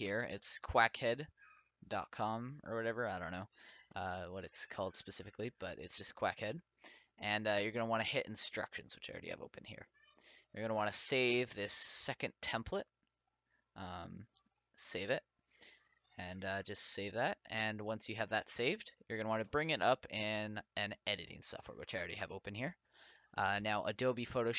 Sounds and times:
Speech: 0:00.0 - 0:09.9, 0:10.6 - 0:12.9, 0:13.8 - 0:15.3, 0:16.2 - 0:22.8, 0:23.4 - 0:24.5.

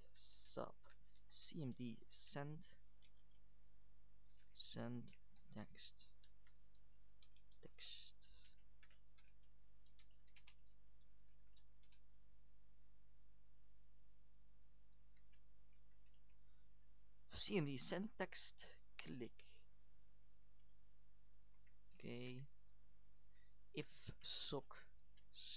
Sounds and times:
Narration, monologue: 0:00.0 - 0:12.1, 0:14.4 - 0:25.5.

